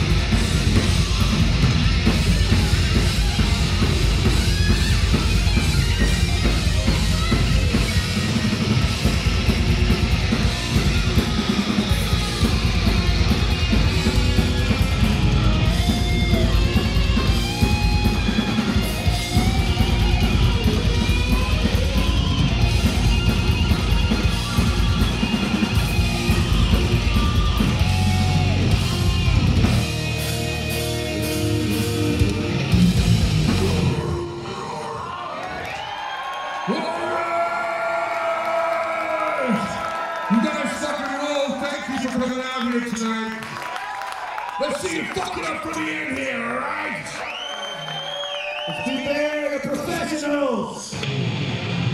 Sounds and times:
Heavy metal: 0.0s - 35.2s, 50.9s - 51.9s
Speech: 40.3s - 43.4s, 44.6s - 47.2s, 48.7s - 51.0s.

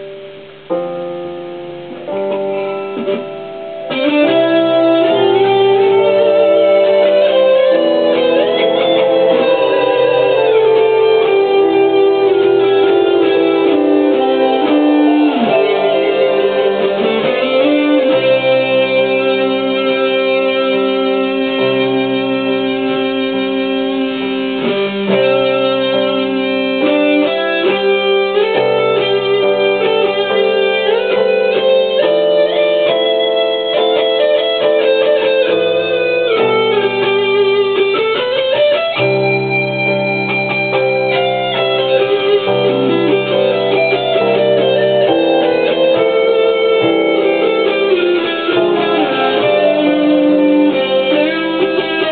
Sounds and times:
Electric guitar: 0.0s - 52.1s
Strum: 0.0s - 52.1s.

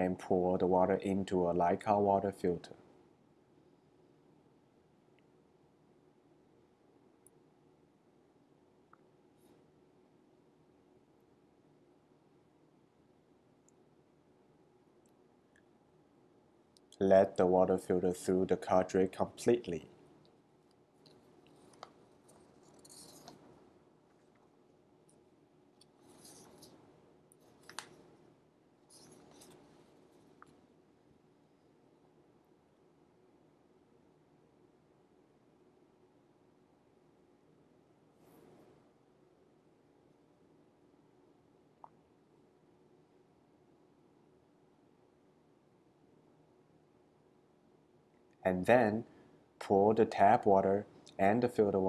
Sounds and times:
Speech: 0.0s - 2.8s, 17.0s - 19.9s, 48.5s - 51.8s.

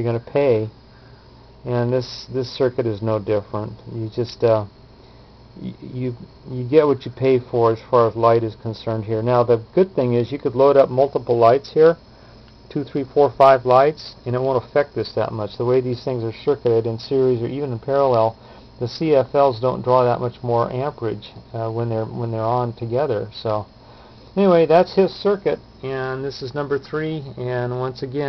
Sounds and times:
Speech: 0.0s - 0.8s, 1.6s - 4.7s, 5.6s - 12.0s, 12.7s - 23.7s, 24.4s - 28.2s.

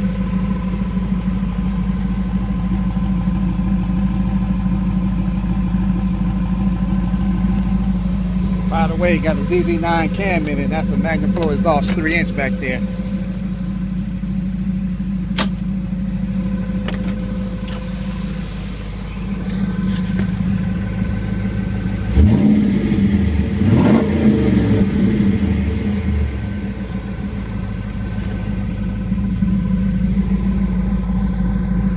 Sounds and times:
Car: 0.0s - 31.9s
Idling: 0.0s - 31.9s.

